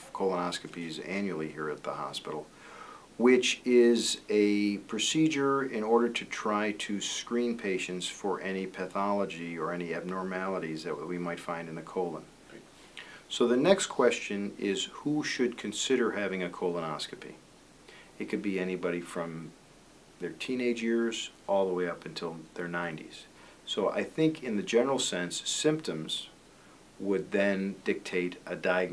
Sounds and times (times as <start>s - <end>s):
Speech: 0.0s - 2.5s, 3.2s - 12.3s, 13.3s - 17.4s, 18.2s - 19.6s, 20.2s - 26.4s, 27.0s - 28.9s.